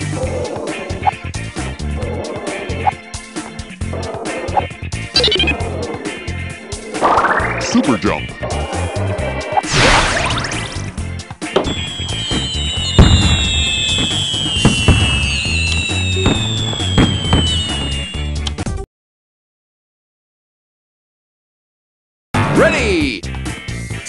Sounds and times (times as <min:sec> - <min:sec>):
Music: 0:00.0 - 0:18.8, 0:22.4 - 0:24.0
Speech: 0:07.6 - 0:08.3, 0:22.5 - 0:23.2.